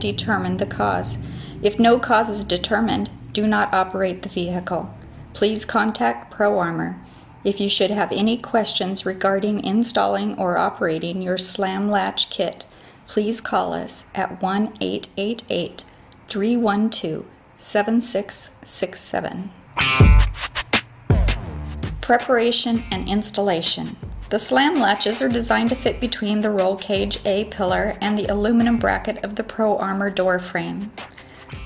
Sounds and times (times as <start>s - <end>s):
Speech: 0.0s - 19.6s, 22.0s - 31.0s.